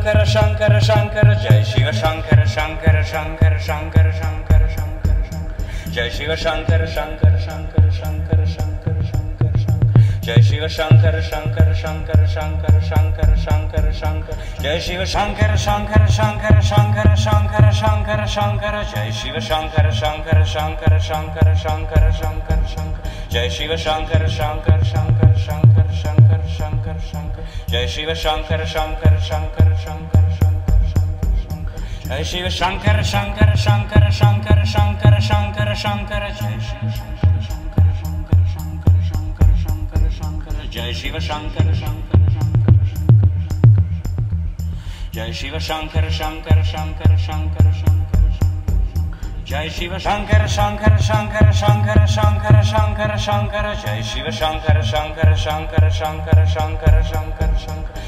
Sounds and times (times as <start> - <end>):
Mantra: 0.0 - 43.1, 45.1 - 58.0.